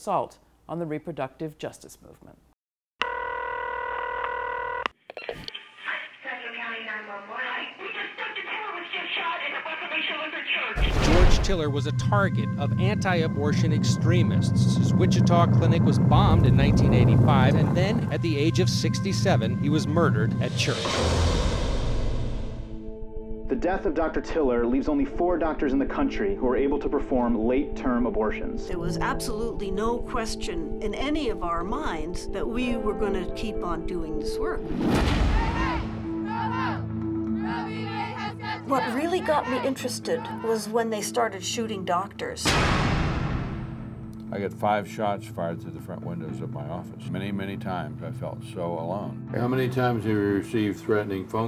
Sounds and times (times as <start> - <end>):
Speech: 5.8 - 20.9, 23.5 - 34.6, 38.7 - 42.4, 44.3 - 51.4.